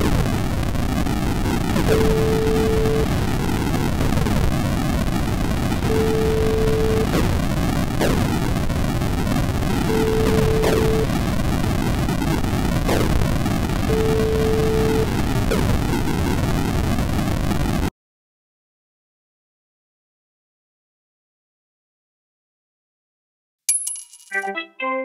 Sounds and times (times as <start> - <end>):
Eruption: 0.0 - 17.9.